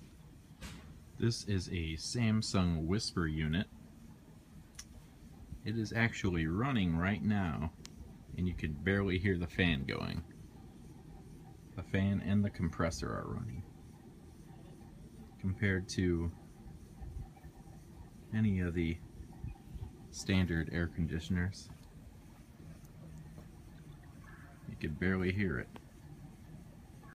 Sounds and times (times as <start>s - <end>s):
Speech: 1.2s - 3.7s, 5.6s - 10.3s, 11.7s - 13.7s, 14.6s - 21.8s, 24.3s - 25.8s.